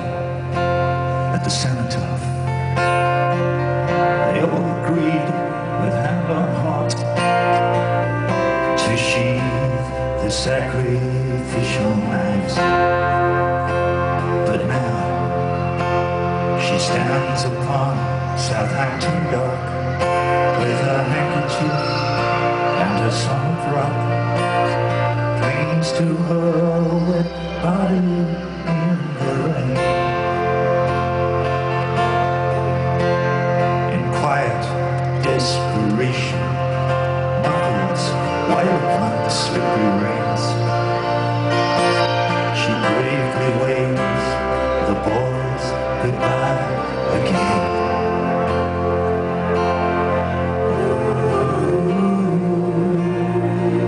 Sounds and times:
Music: 0.0s - 53.8s.

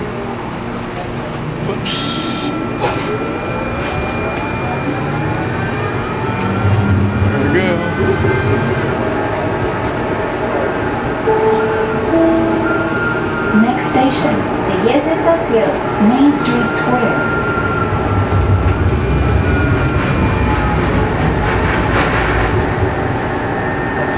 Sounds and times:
Train: 0.0s - 24.1s
Speech: 7.3s - 8.1s.

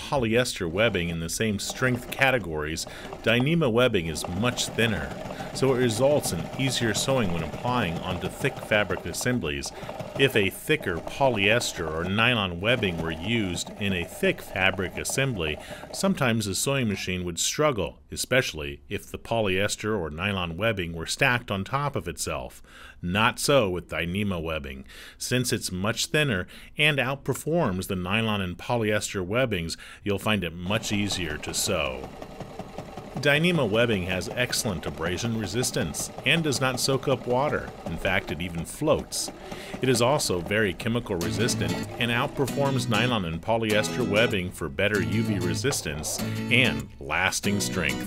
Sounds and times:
Sewing machine: 0.0s - 16.8s, 30.7s - 48.0s
Speech: 0.0s - 32.1s, 33.2s - 48.0s
Music: 41.2s - 48.0s.

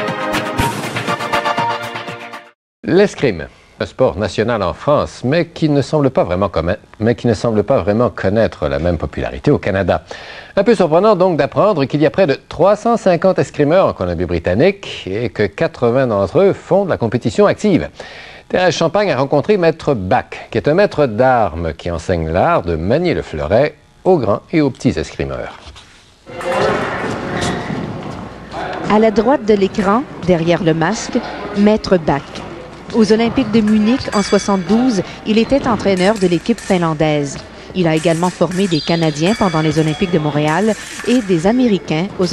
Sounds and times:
Speech: 2.8s - 17.9s, 18.5s - 25.6s, 28.5s - 32.3s, 32.9s - 42.3s.

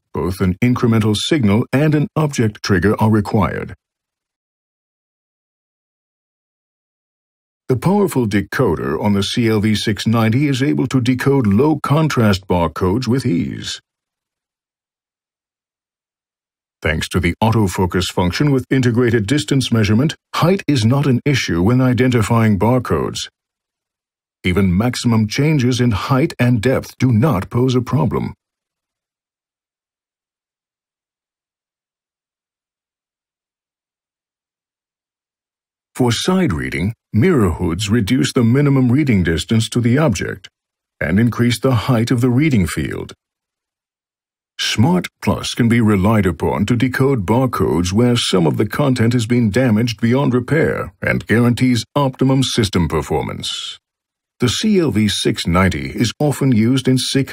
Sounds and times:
Speech: 0.1s - 3.8s, 7.7s - 13.8s, 16.8s - 23.3s, 24.5s - 28.4s, 36.0s - 43.2s, 44.6s - 53.8s, 54.4s - 57.3s.

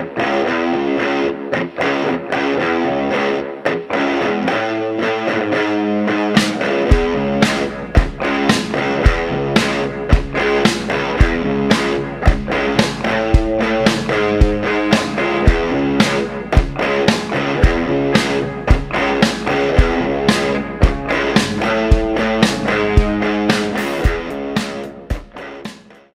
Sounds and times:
Music: 0.0s - 26.1s.

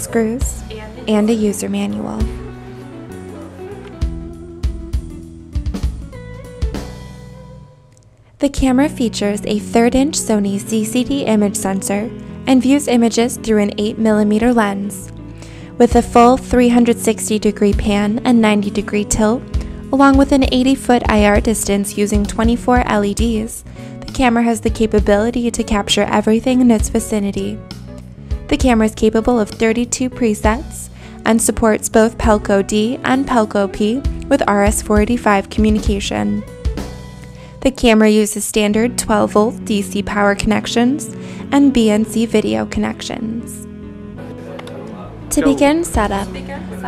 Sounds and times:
Speech: 0.0s - 2.3s, 8.4s - 15.1s, 15.8s - 19.4s, 20.0s - 27.6s, 28.5s - 36.4s, 37.7s - 43.6s, 44.8s - 46.8s
Music: 0.0s - 46.8s.

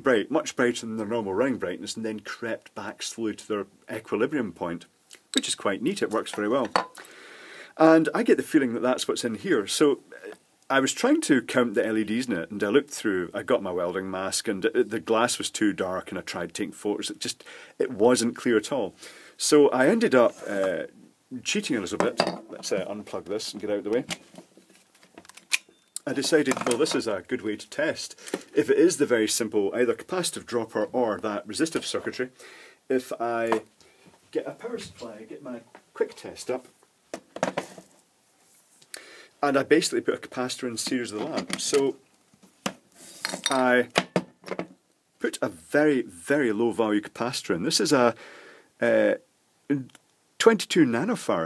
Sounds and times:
Speech: 0.0s - 6.8s, 7.8s - 24.1s, 26.0s - 33.7s, 34.3s - 36.7s, 39.4s - 42.0s, 43.5s - 43.9s, 45.2s - 48.2s, 48.8s - 51.4s.

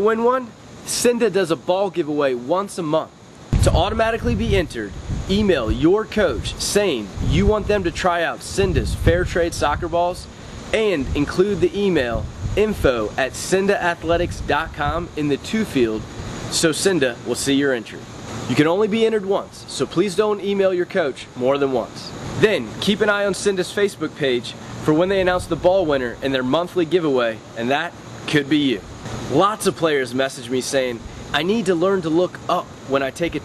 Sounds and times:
Speech: 0.0s - 33.4s.

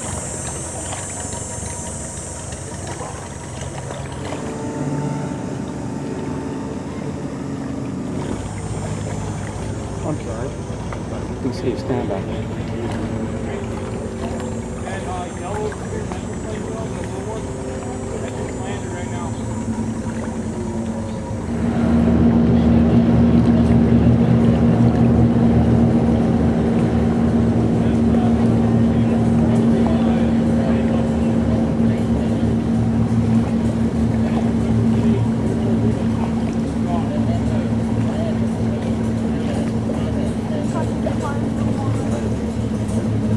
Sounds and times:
Fixed-wing aircraft, airplane: 0.0s - 43.3s
Speech: 11.4s - 13.9s, 14.8s - 19.6s, 27.7s - 33.0s, 34.2s - 43.3s.

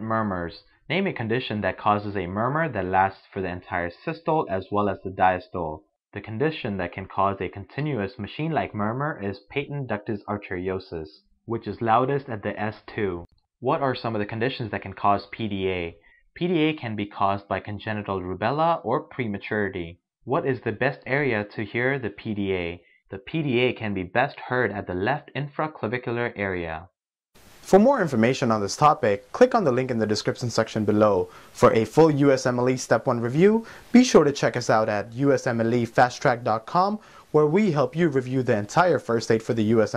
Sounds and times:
Speech: 0.0s - 26.9s, 27.6s - 39.9s.

